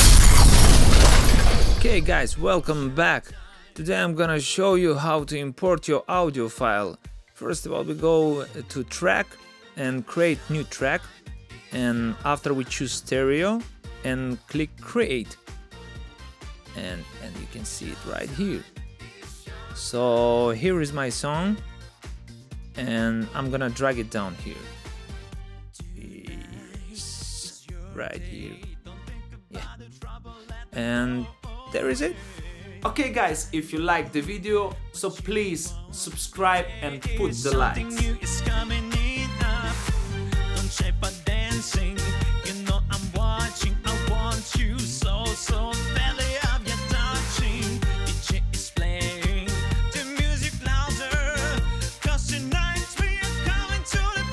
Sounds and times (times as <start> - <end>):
Music: 0.0 - 54.3
Speech: 1.8 - 11.1, 11.8 - 15.4, 16.8 - 18.7, 19.8 - 21.6, 22.8 - 24.6, 25.8 - 28.7, 30.8 - 32.2, 32.8 - 38.0.